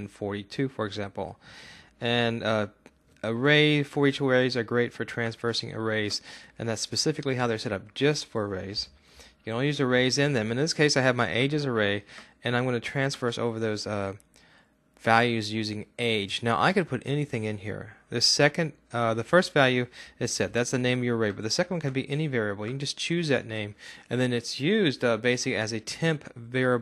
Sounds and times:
Speech: 0:00.0 - 0:01.4, 0:02.0 - 0:14.2, 0:15.0 - 0:26.8.

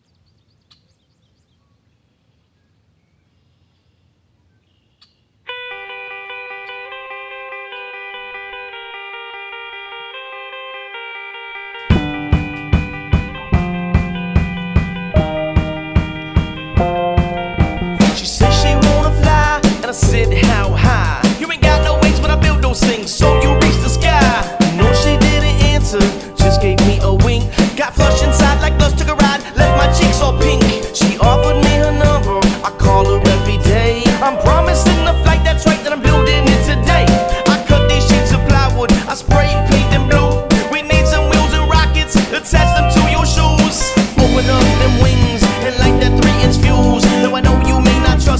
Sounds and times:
Soul music: 0:05.5 - 0:48.3.

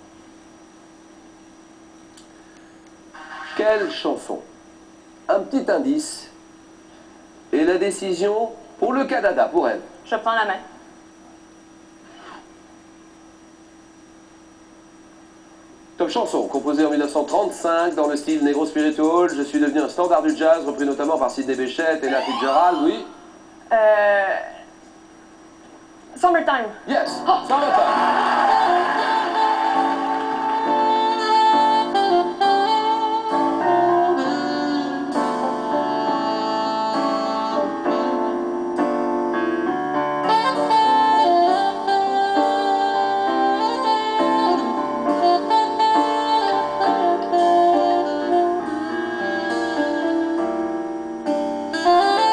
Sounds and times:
Music: 0:16.4 - 0:22.4, 0:27.0 - 0:52.3.

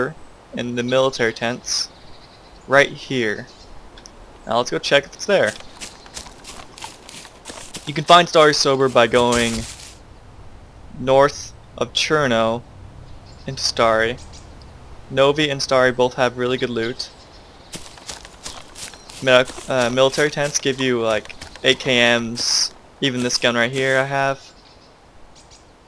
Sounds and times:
Speech: 0:00.0 - 0:01.9, 0:02.7 - 0:03.5, 0:04.5 - 0:05.6, 0:07.8 - 0:09.7, 0:11.0 - 0:12.6, 0:13.5 - 0:14.2, 0:15.1 - 0:17.1, 0:19.2 - 0:24.5.

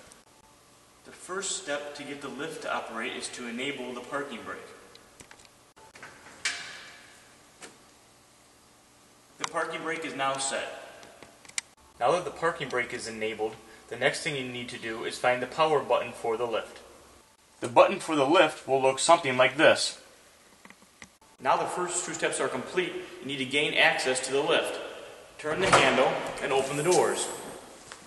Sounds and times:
Speech: 0:01.1 - 0:04.8, 0:09.4 - 0:11.0, 0:12.0 - 0:16.9, 0:17.6 - 0:20.1, 0:21.4 - 0:27.6.

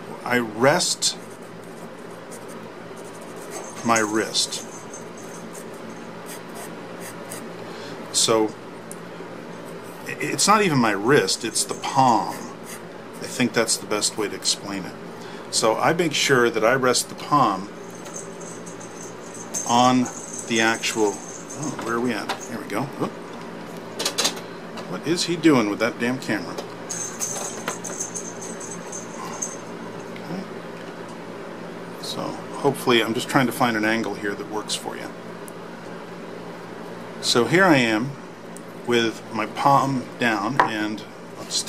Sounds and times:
Speech: 0:00.1 - 0:01.2, 0:03.8 - 0:04.6, 0:08.1 - 0:08.6, 0:10.1 - 0:12.5, 0:13.2 - 0:17.7, 0:19.7 - 0:23.2, 0:24.9 - 0:26.7, 0:30.2 - 0:30.5, 0:32.0 - 0:35.2, 0:37.2 - 0:38.2, 0:38.9 - 0:41.6.

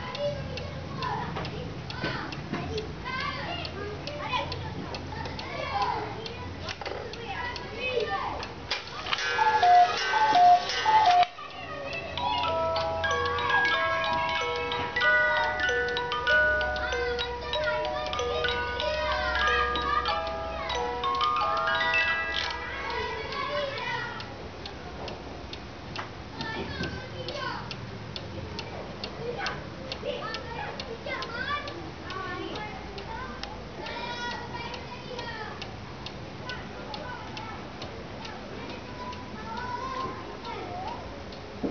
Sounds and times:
Speech: 0:00.0 - 0:09.1, 0:11.2 - 0:25.2, 0:26.3 - 0:27.8, 0:28.4 - 0:41.6
Tick-tock: 0:00.0 - 0:41.7.

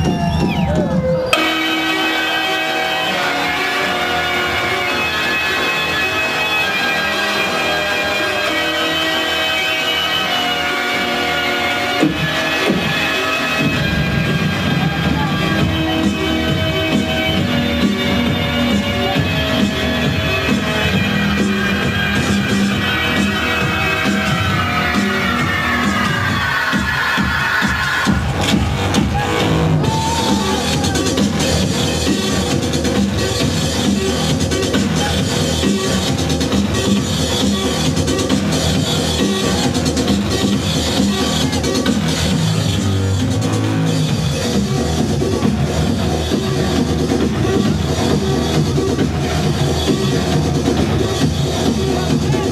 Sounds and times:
Techno: 0:00.0 - 0:52.5.

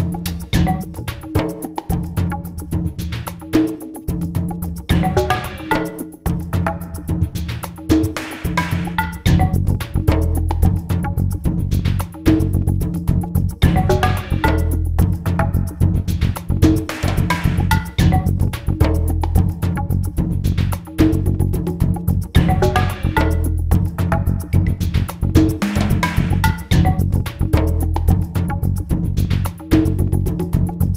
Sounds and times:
Music: 0:00.0 - 0:30.9.

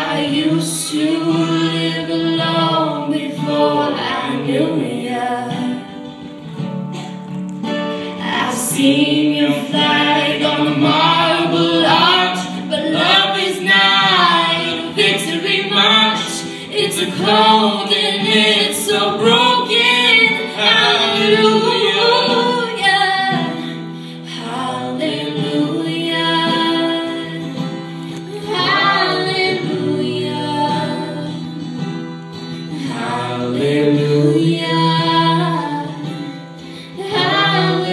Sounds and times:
Female singing: 0:00.0 - 0:05.9, 0:08.2 - 0:31.6, 0:32.8 - 0:36.3, 0:36.9 - 0:37.9
Inside, large room or hall: 0:00.0 - 0:37.9
Music: 0:00.0 - 0:37.9.

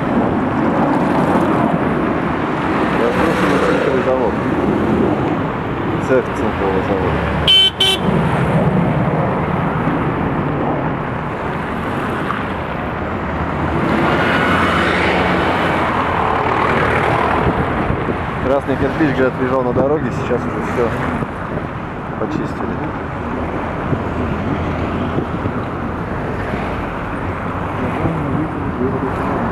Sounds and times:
Car: 0:00.0 - 0:29.5
Speech: 0:03.0 - 0:04.4, 0:06.0 - 0:07.2, 0:18.4 - 0:21.2, 0:22.2 - 0:22.9, 0:27.8 - 0:29.5.

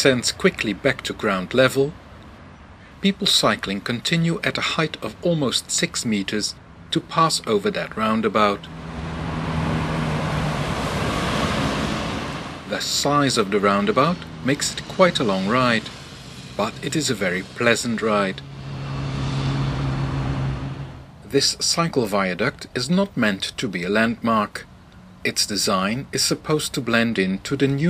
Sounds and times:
Speech: 0:00.0 - 0:02.0, 0:03.0 - 0:08.7, 0:12.7 - 0:15.9, 0:16.6 - 0:18.4, 0:21.3 - 0:27.9.

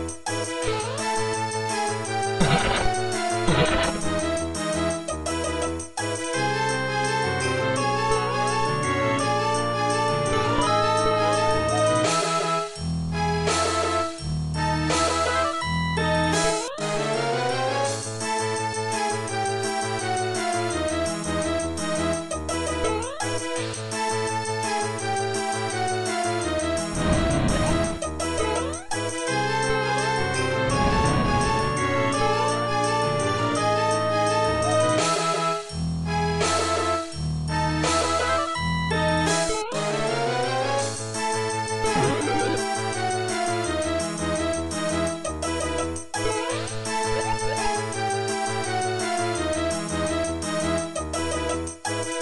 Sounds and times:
Video game music: 0:00.0 - 0:52.2.

